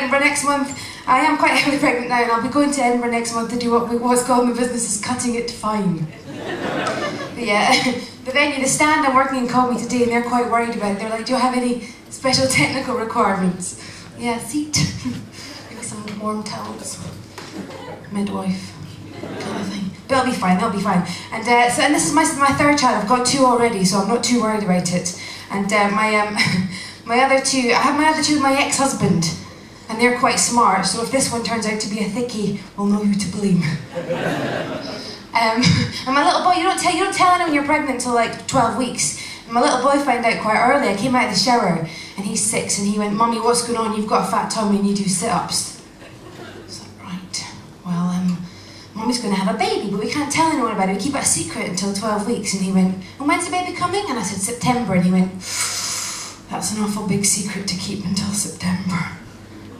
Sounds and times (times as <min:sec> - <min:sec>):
Speech: 0:00.0 - 0:06.1, 0:07.4 - 0:33.9, 0:35.3 - 0:45.8, 0:46.7 - 0:55.4, 0:56.5 - 0:59.2.